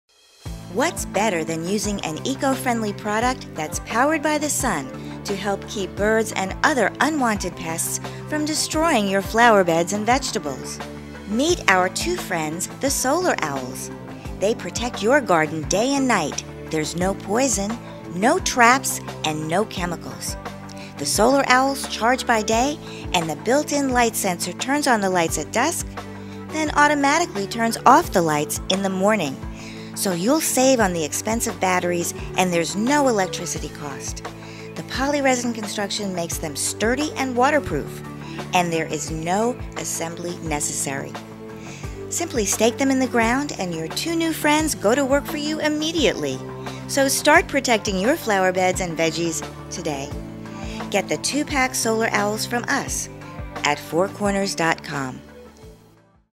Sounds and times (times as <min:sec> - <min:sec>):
Music: 0:00.0 - 0:56.3
Speech: 0:00.7 - 0:25.9, 0:26.5 - 0:29.4, 0:30.0 - 0:34.2, 0:34.8 - 0:41.2, 0:42.1 - 0:50.1, 0:50.8 - 0:55.2.